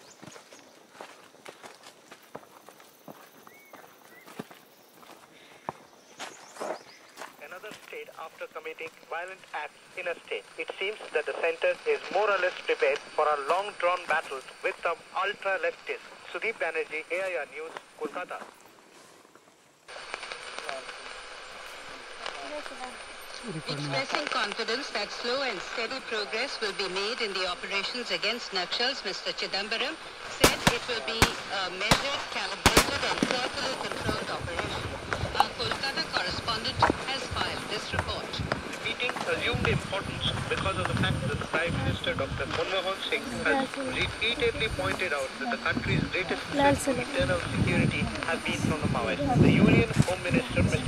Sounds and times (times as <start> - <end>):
Speech: 22.3 - 50.8.